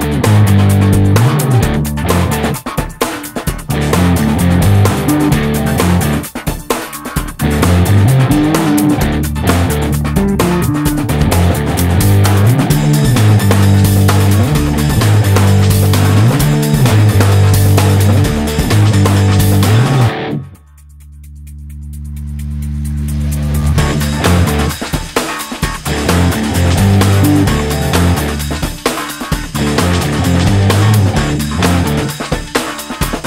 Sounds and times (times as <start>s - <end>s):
Music: 0.0s - 33.2s.